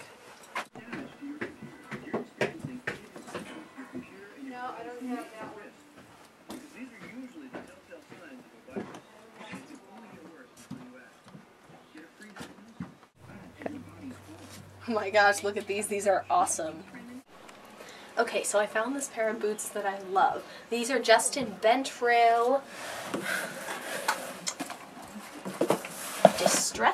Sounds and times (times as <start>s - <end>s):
Speech: 0.8s - 5.7s, 11.9s - 17.3s, 26.3s - 26.9s.